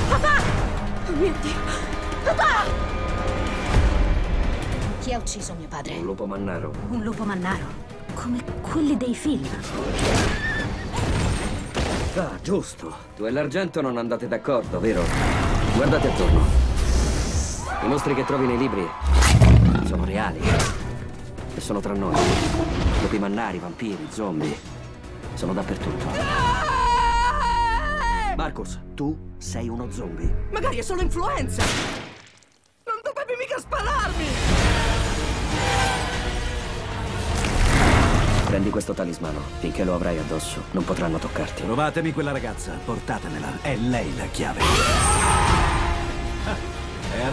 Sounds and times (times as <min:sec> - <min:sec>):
Music: 0:00.0 - 0:31.7, 0:33.5 - 0:47.3.